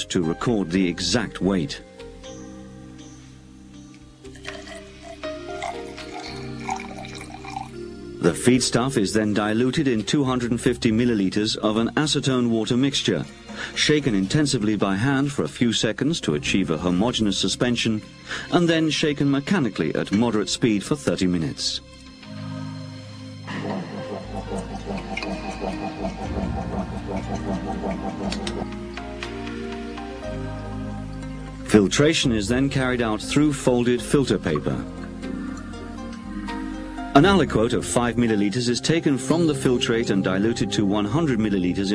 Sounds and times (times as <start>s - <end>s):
Speech: 0.0s - 1.8s, 8.2s - 21.8s, 31.7s - 34.9s, 37.2s - 41.9s
Music: 0.0s - 41.9s.